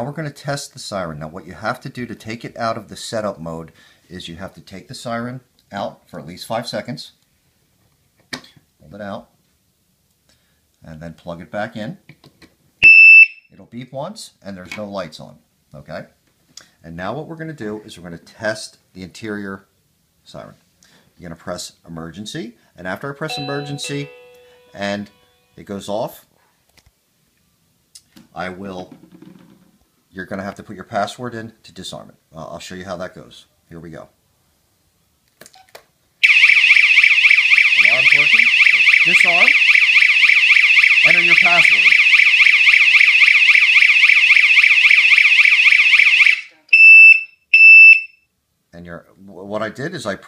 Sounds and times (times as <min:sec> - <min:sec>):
Car alarm: 0:12.8 - 0:13.5, 0:36.2 - 0:48.3.